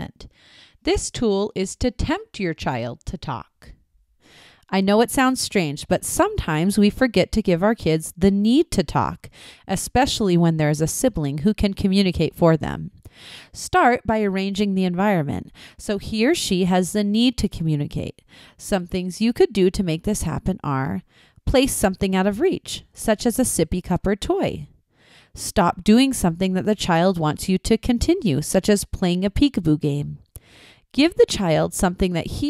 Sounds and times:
Female speech, woman speaking: 0.0s - 0.2s, 0.9s - 3.7s, 4.7s - 12.9s, 13.6s - 24.7s, 25.4s - 30.2s, 31.0s - 32.5s
Narration, monologue: 0.0s - 32.5s
Speech synthesizer: 13.6s - 18.1s, 18.7s - 24.7s.

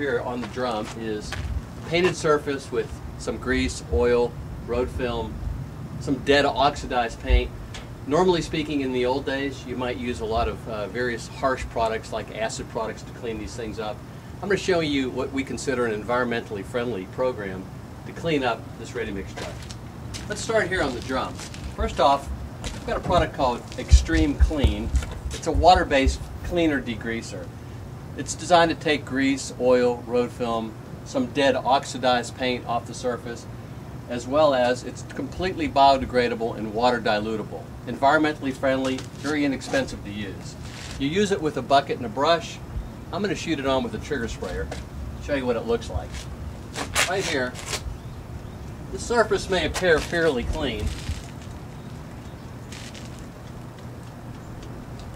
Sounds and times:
Speech: 0.0s - 5.4s, 6.0s - 7.5s, 8.1s - 19.6s, 20.2s - 27.5s, 28.2s - 33.5s, 34.1s - 46.2s, 47.0s - 47.7s, 48.9s - 51.0s.

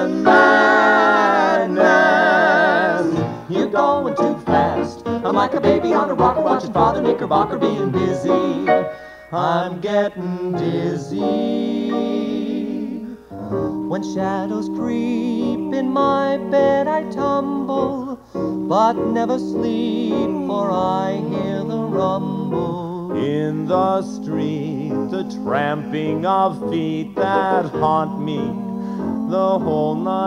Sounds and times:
Funny music: 0.0s - 12.3s, 13.3s - 30.2s.

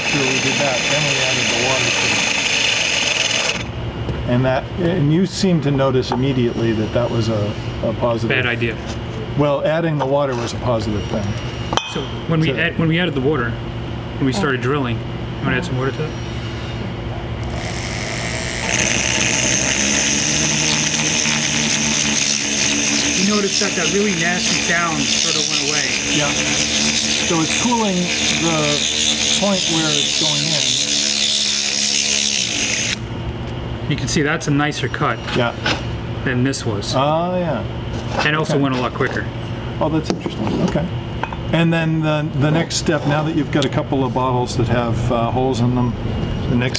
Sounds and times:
Drill: 0.0s - 3.7s, 17.4s - 33.0s
Speech: 0.1s - 2.2s, 4.3s - 11.4s, 23.2s - 26.5s, 27.3s - 28.8s, 29.4s - 30.8s, 33.9s - 35.6s, 36.2s - 40.9s, 41.5s - 46.7s.

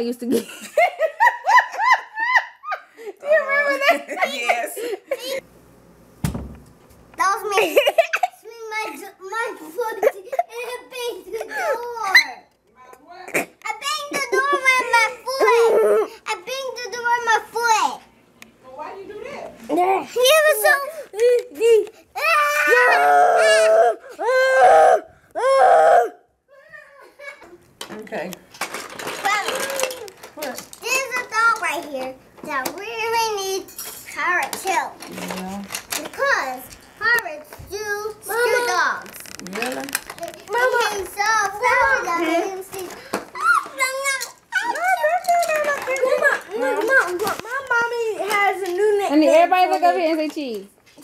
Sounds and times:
Inside, small room: 0.0s - 51.0s
Child speech, kid speaking: 3.2s - 5.4s, 7.2s - 23.5s, 29.2s - 51.0s.

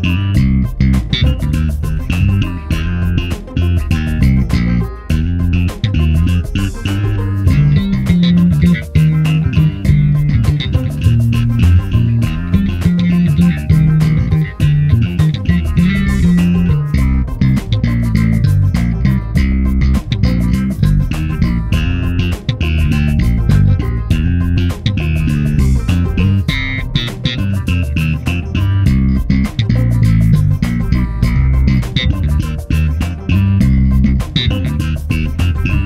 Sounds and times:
Bass guitar: 0.0s - 35.8s
Strum: 0.0s - 35.8s.

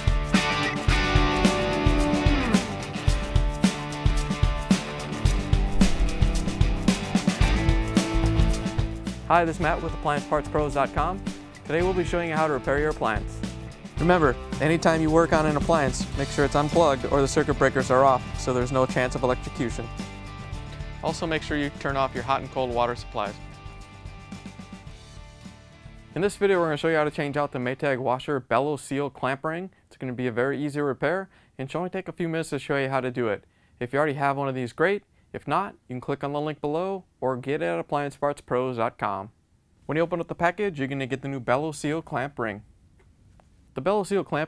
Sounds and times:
Speech: 9.3s - 13.4s, 14.0s - 19.9s, 21.0s - 23.4s, 26.2s - 42.7s, 43.8s - 44.4s.

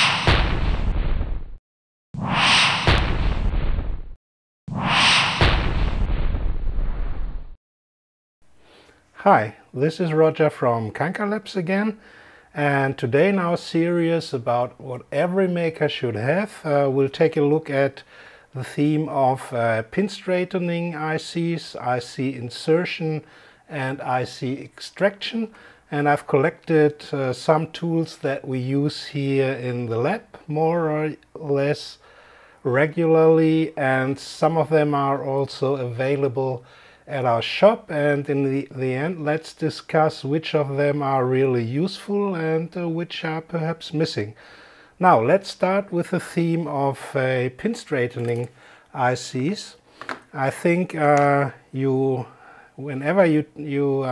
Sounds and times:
Speech: 9.2s - 12.0s, 12.6s - 18.0s, 18.6s - 32.0s, 32.6s - 44.4s, 45.0s - 54.1s.

